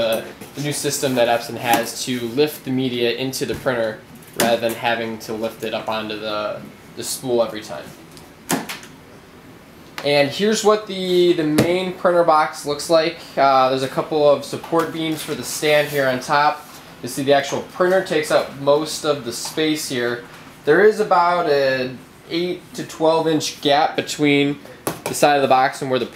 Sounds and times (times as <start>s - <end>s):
Speech: 0.0s - 8.0s, 10.0s - 26.1s.